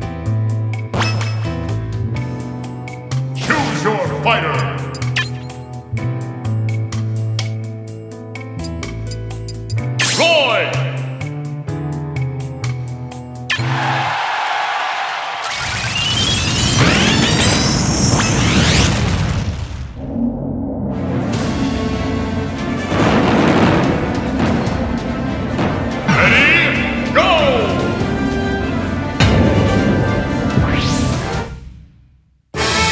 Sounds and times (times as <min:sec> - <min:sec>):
Music: 0:00.0 - 0:14.9, 0:20.6 - 0:32.9.